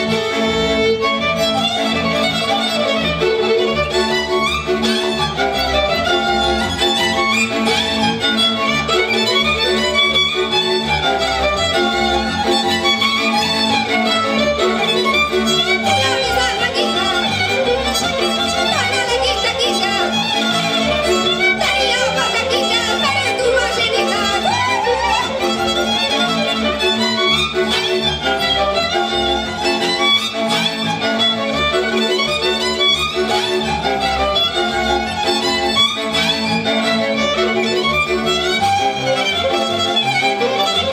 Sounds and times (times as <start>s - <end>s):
Violin, fiddle: 0.0s - 40.9s.